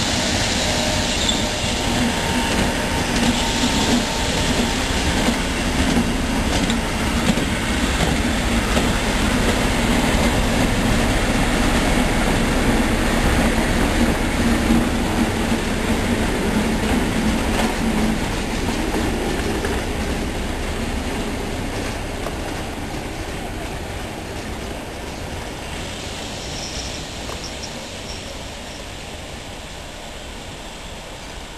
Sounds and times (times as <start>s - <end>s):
Railroad car, train wagon: 0.0s - 31.5s
Train: 0.0s - 31.5s
Clickety-clack: 1.2s - 10.8s, 16.7s - 20.3s.